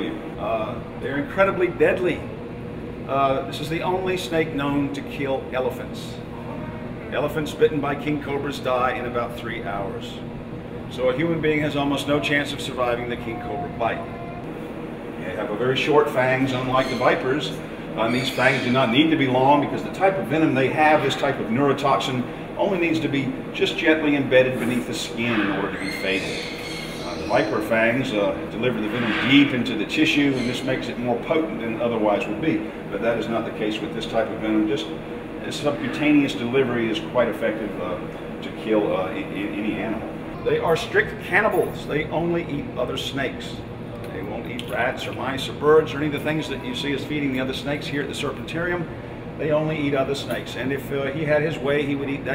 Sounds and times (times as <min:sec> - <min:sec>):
Speech: 0:00.0 - 0:02.3, 0:03.1 - 0:06.2, 0:07.0 - 0:10.2, 0:10.9 - 0:14.4, 0:15.2 - 0:52.3.